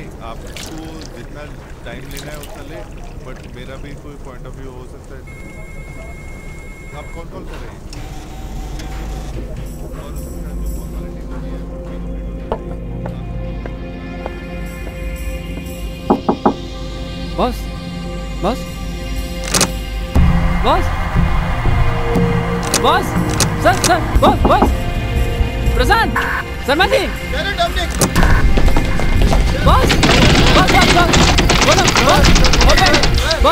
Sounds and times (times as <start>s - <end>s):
Music: 8.0s - 33.5s.